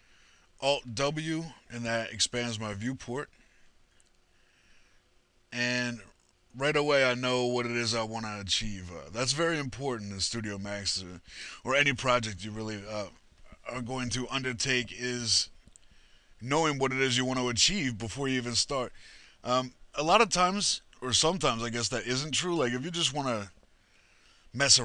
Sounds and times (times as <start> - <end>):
Speech: 0.6 - 3.3, 5.6 - 15.5, 16.4 - 23.6, 24.6 - 24.8.